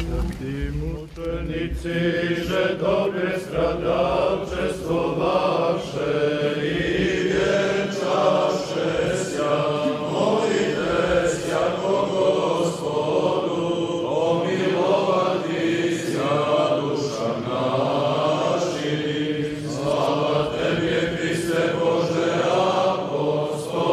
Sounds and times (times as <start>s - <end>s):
Chant: 0.0s - 23.9s
Choir: 0.0s - 23.9s.